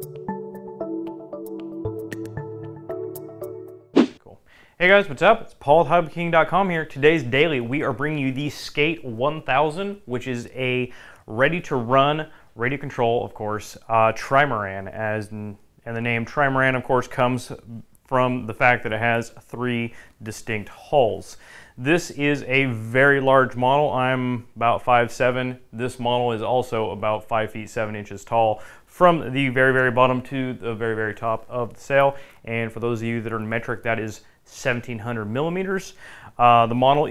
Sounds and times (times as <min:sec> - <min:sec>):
Speech: 0:04.3 - 0:37.1.